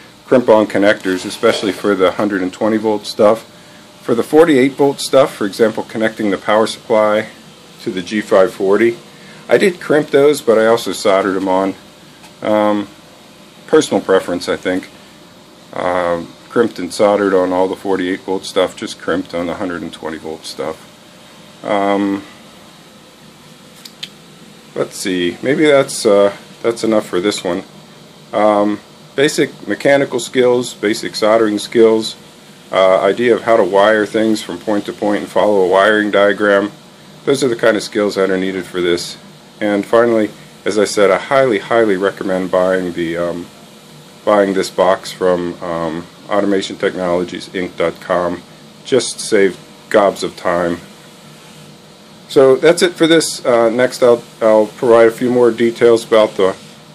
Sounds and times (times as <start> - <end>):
Inside, small room: 0.0 - 56.9
Speech: 0.3 - 11.8, 12.4 - 13.0, 13.7 - 15.0, 15.7 - 20.9, 21.6 - 22.4, 24.8 - 27.7, 28.3 - 43.6, 44.2 - 50.9, 52.3 - 56.7.